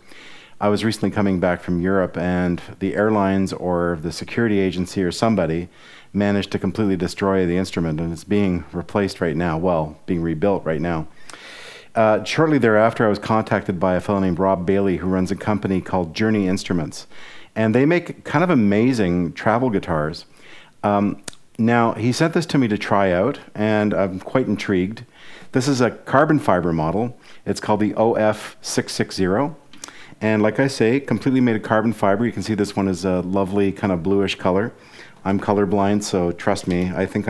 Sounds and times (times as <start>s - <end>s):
Speech: 0.6s - 11.1s, 12.0s - 29.6s, 30.2s - 37.2s.